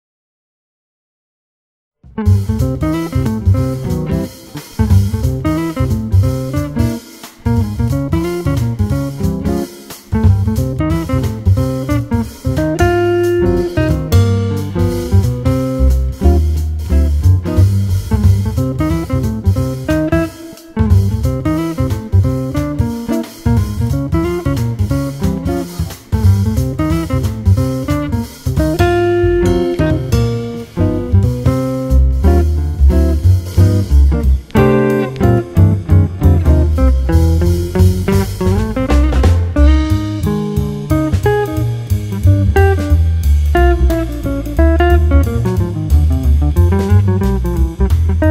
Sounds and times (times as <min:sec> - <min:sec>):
Guitar: 0:02.1 - 0:48.3.